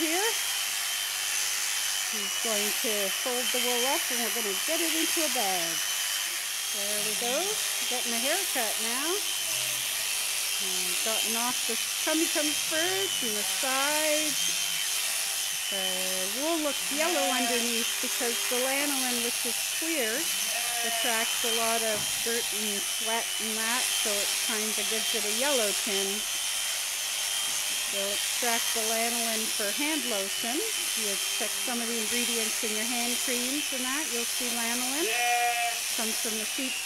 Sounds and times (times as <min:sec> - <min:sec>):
Speech: 0:00.0 - 0:00.4, 0:02.2 - 0:05.8, 0:06.8 - 0:09.2, 0:10.6 - 0:14.4, 0:15.8 - 0:26.2, 0:27.9 - 0:35.2, 0:36.0 - 0:36.8.